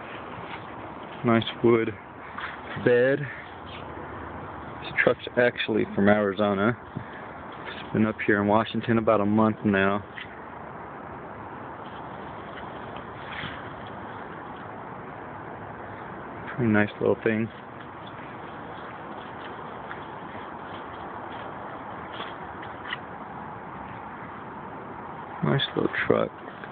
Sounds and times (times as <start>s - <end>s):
Speech: 1.2s - 2.0s, 2.8s - 3.4s, 4.8s - 6.8s, 7.9s - 10.1s, 16.5s - 17.6s, 25.4s - 26.3s.